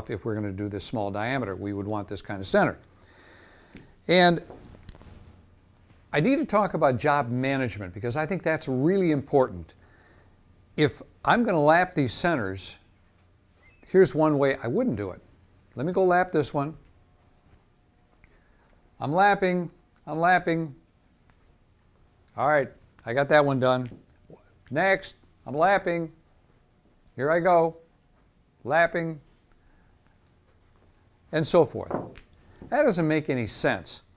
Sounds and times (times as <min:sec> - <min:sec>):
Speech: 0:00.0 - 0:02.8, 0:04.1 - 0:04.5, 0:06.2 - 0:09.8, 0:10.8 - 0:12.8, 0:13.9 - 0:15.2, 0:15.8 - 0:16.8, 0:19.0 - 0:20.8, 0:22.4 - 0:23.9, 0:24.7 - 0:26.2, 0:27.2 - 0:27.9, 0:28.6 - 0:29.3, 0:31.3 - 0:32.0, 0:32.7 - 0:34.1.